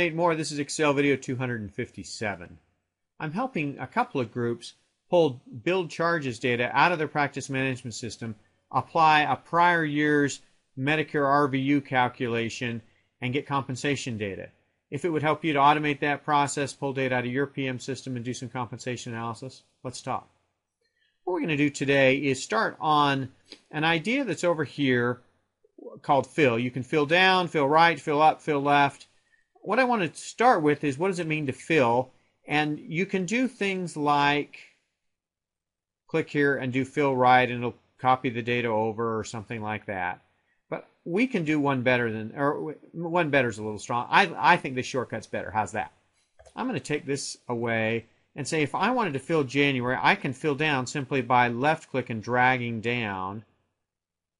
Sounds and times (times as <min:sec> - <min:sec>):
Speech: 0:00.0 - 0:02.6, 0:03.2 - 0:20.3, 0:21.3 - 0:25.2, 0:25.8 - 0:34.8, 0:36.1 - 0:45.9, 0:46.5 - 0:53.4.